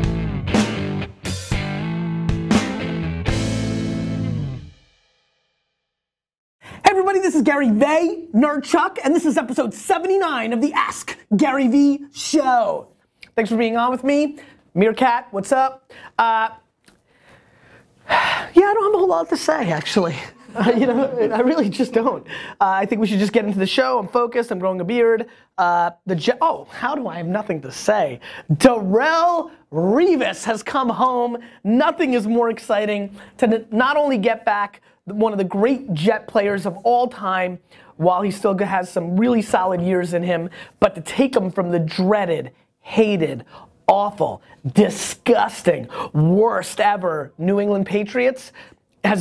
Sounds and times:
Speech: 6.8s - 16.7s, 18.6s - 49.2s.

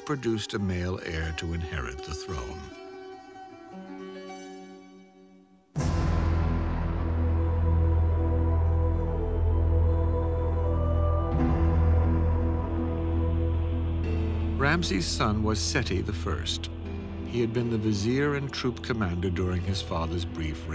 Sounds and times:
Music: 0.0s - 20.7s.

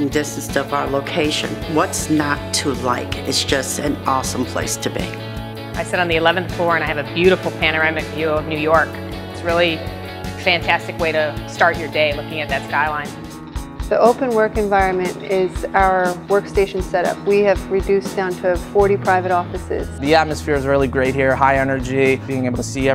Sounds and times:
Music: 0.0s - 22.9s.

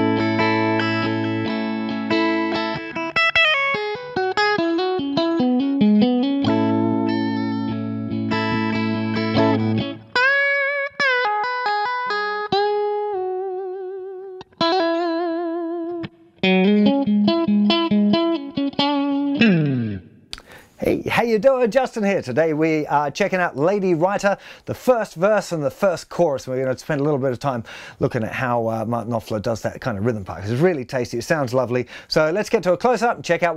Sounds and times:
Electric guitar: 0.0s - 20.7s.

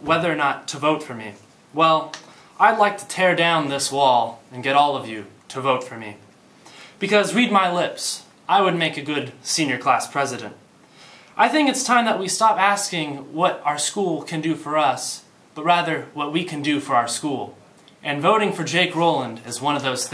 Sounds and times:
Male speech, man speaking: 0.0s - 6.2s, 7.0s - 10.6s, 11.4s - 20.1s
Narration, monologue: 0.0s - 20.1s.

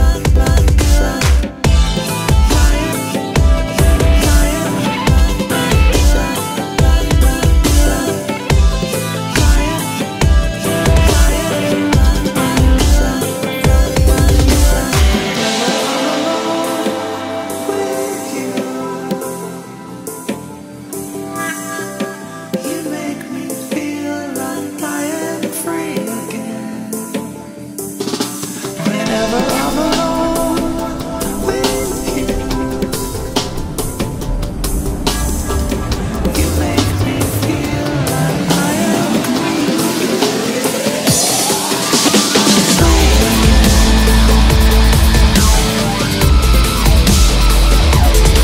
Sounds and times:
Dubstep: 0.0s - 48.4s.

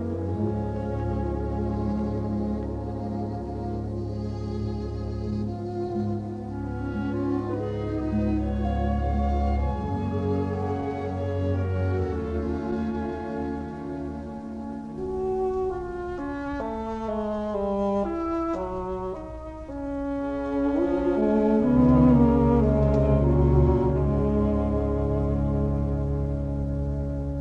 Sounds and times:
Saxophone: 0.0s - 27.4s.

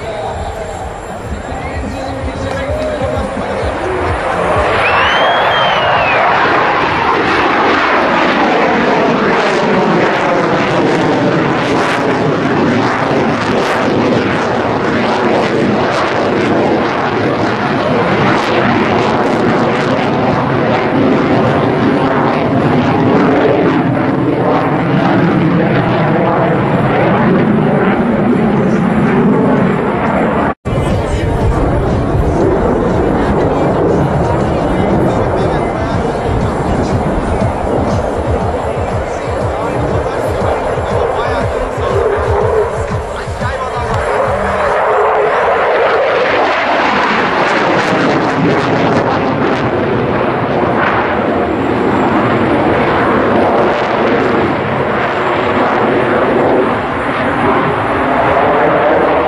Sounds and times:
Speech: 0.0s - 4.8s, 30.7s - 46.4s
Music: 0.8s - 6.6s, 30.7s - 44.9s.

